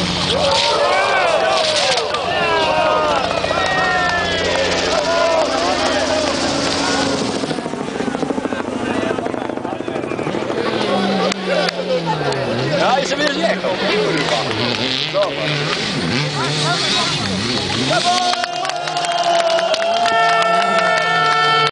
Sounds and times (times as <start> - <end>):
Speech: 0.5 - 19.4.